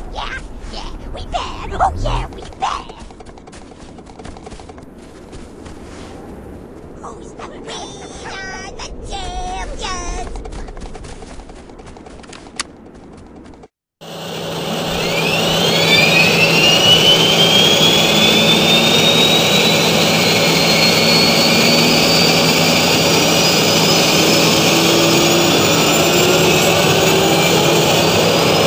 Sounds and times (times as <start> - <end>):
Jet engine: 1.7 - 3.2, 14.0 - 28.6.